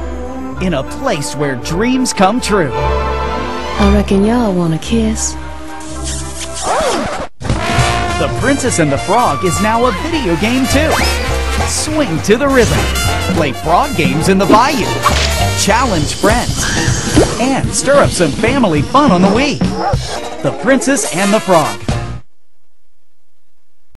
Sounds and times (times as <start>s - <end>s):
Music: 0.0s - 22.3s
Speech: 8.2s - 11.1s, 11.7s - 15.0s, 17.4s - 19.6s, 20.4s - 21.8s.